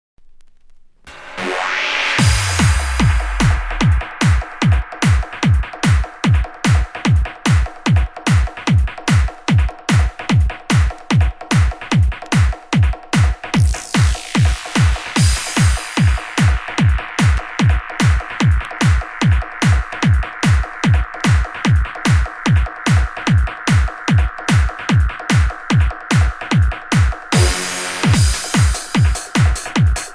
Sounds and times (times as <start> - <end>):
Trance music: 1.1 - 8.0, 13.1 - 30.1.